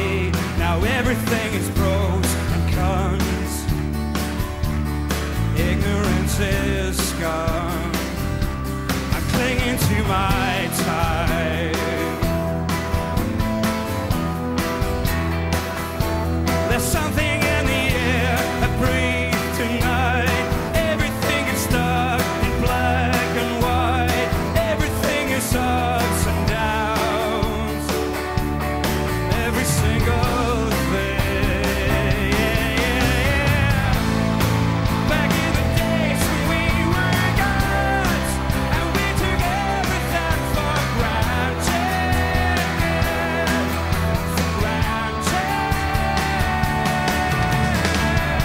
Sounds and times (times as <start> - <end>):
Rhythm and blues: 0.0 - 48.4.